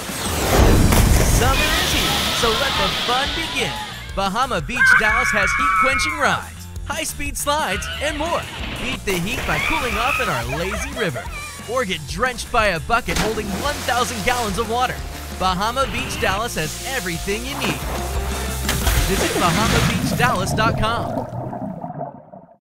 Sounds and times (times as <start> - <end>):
Music: 0.0 - 21.0
Speech: 1.4 - 17.8, 19.0 - 21.2
Gurgling: 7.6 - 11.7, 17.5 - 22.6.